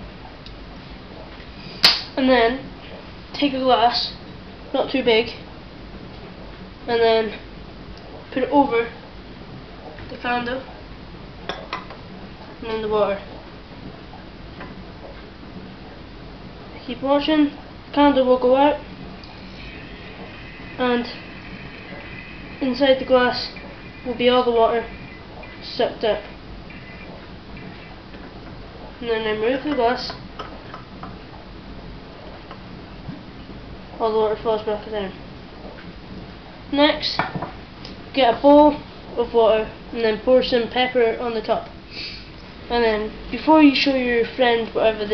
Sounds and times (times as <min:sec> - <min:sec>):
Speech: 0:02.2 - 0:02.7, 0:03.4 - 0:05.5, 0:06.9 - 0:07.4, 0:08.3 - 0:09.0, 0:10.1 - 0:10.7, 0:12.6 - 0:13.3, 0:16.8 - 0:18.8, 0:20.8 - 0:21.2, 0:22.6 - 0:24.9, 0:25.6 - 0:26.3, 0:29.0 - 0:30.2, 0:34.0 - 0:35.2, 0:36.7 - 0:37.3, 0:38.2 - 0:41.7, 0:42.7 - 0:45.1.